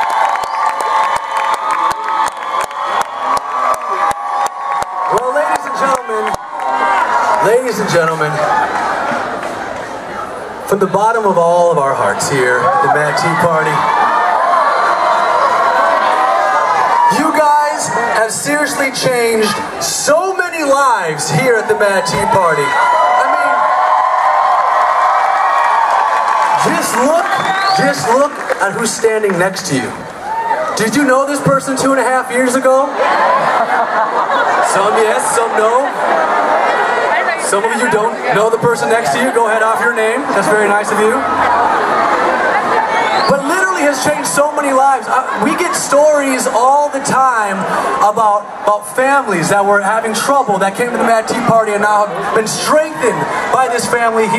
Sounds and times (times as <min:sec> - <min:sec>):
Male speech, man speaking: 0:05.1 - 0:06.4, 0:07.4 - 0:08.4, 0:10.7 - 0:13.9, 0:17.1 - 0:23.7, 0:26.6 - 0:30.0, 0:30.8 - 0:32.9, 0:34.6 - 0:36.0, 0:37.4 - 0:41.2, 0:43.3 - 0:54.3.